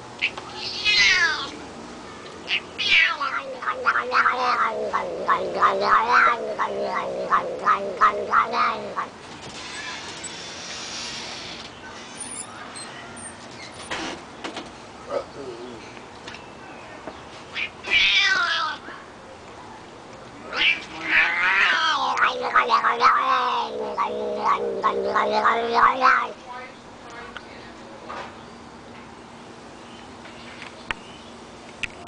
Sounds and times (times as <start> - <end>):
Speech: 15.1 - 15.8, 25.9 - 28.2.